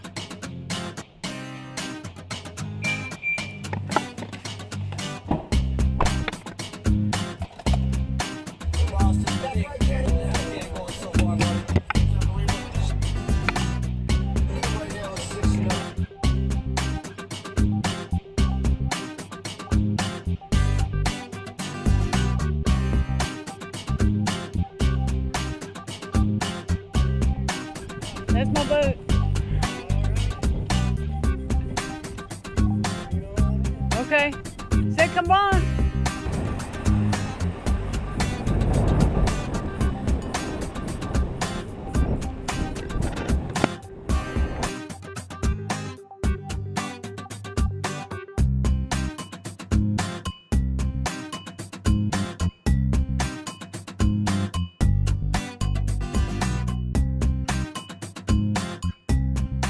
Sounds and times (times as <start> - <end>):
Music: 0.0 - 59.7
Speech: 28.3 - 29.0, 29.6 - 30.4, 33.1 - 35.7.